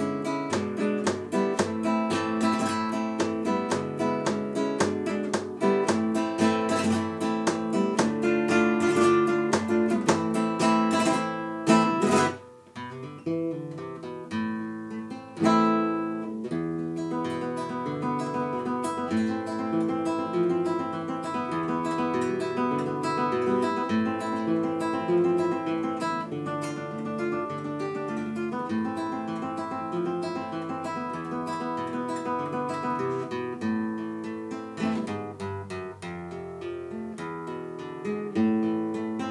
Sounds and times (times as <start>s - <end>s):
Acoustic guitar: 0.0s - 39.3s.